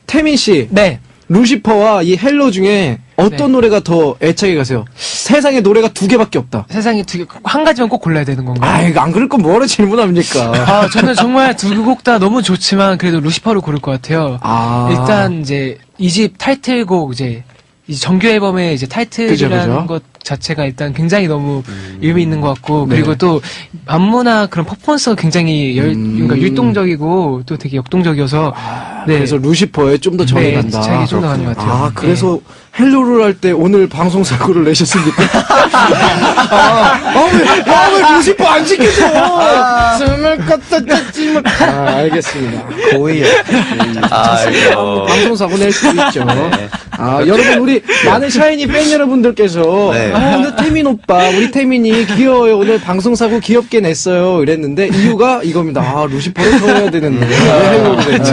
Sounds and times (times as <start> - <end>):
Speech: 0.1 - 58.3.